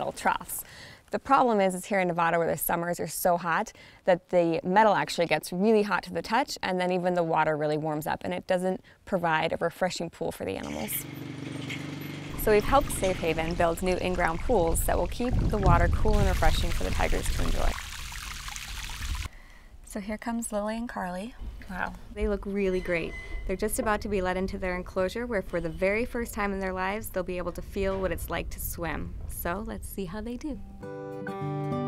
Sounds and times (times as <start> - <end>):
Speech: 0.0 - 11.0, 19.9 - 30.6
Pour: 11.5 - 19.3.